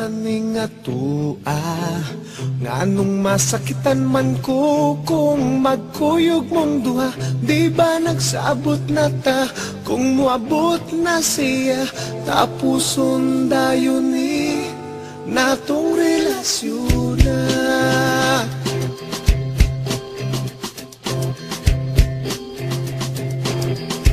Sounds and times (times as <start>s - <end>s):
Independent music: 0.0s - 24.1s
Sad music: 10.6s - 19.2s.